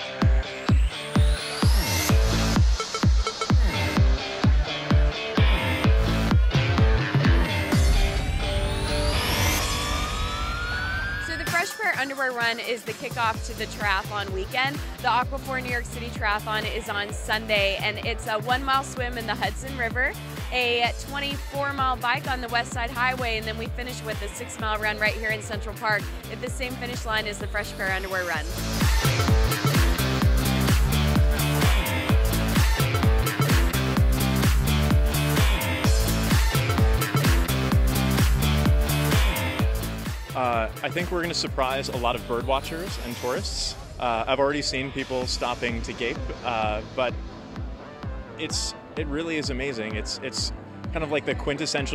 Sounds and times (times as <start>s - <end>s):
Music: 0.0s - 51.9s
Speech: 11.4s - 28.4s, 40.4s - 47.1s, 48.4s - 51.9s.